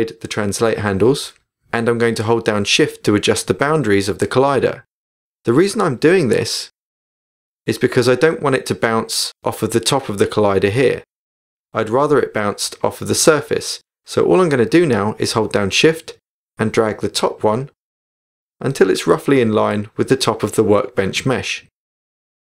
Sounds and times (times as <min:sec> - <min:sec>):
Speech: 0:00.0 - 0:04.9, 0:05.5 - 0:06.8, 0:07.7 - 0:11.1, 0:11.8 - 0:17.8, 0:18.6 - 0:21.8.